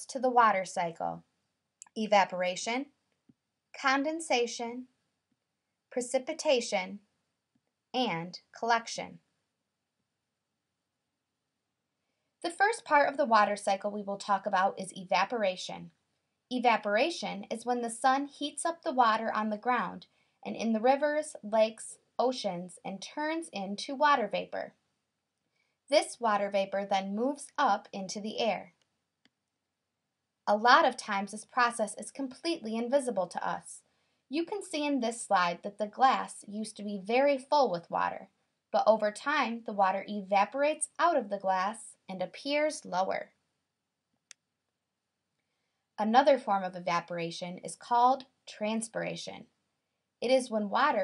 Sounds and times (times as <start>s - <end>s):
Speech: 0.0s - 1.2s, 1.8s - 3.0s, 3.8s - 4.9s, 5.9s - 7.1s, 8.0s - 9.2s, 12.5s - 24.8s, 25.9s - 28.8s, 30.5s - 43.4s, 46.0s - 49.5s, 50.2s - 51.0s.